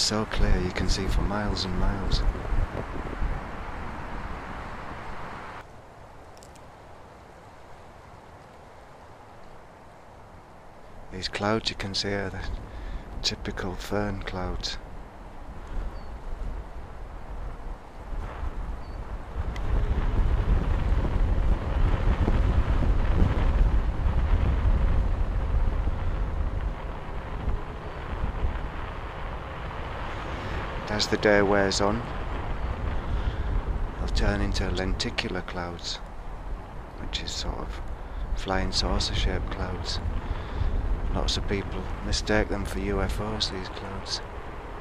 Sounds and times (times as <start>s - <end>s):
Wind noise (microphone): 0.0s - 5.6s, 15.5s - 44.8s.